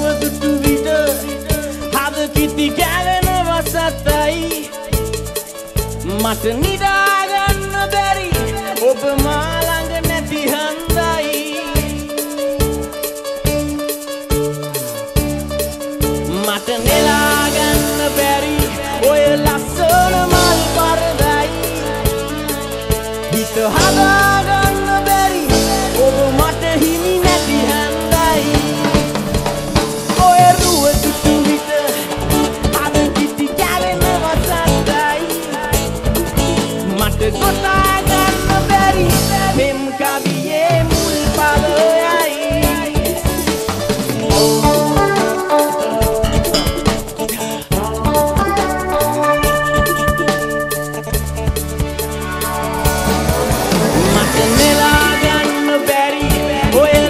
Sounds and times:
Music: 0:00.0 - 0:57.1.

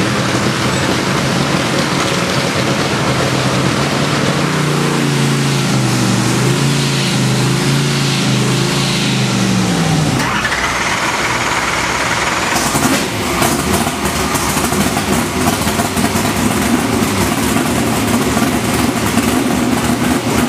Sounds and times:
Idling: 0:00.0 - 0:20.4
Medium engine (mid frequency): 0:00.0 - 0:20.4
Vehicle: 0:00.0 - 0:20.4
Accelerating, revving, vroom: 0:02.6 - 0:10.3, 0:12.6 - 0:20.4
Engine starting: 0:10.2 - 0:15.3.

